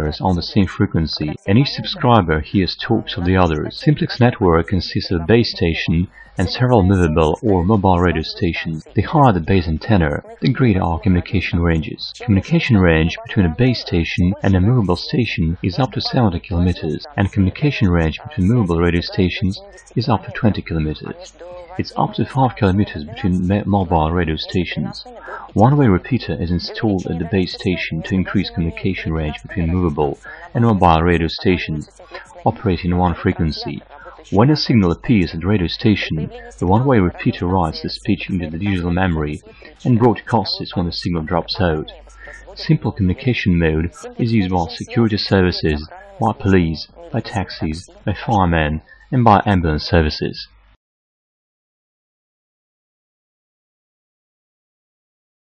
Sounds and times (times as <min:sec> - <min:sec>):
Speech: 0:00.0 - 0:50.6
Radio: 0:00.0 - 0:50.8.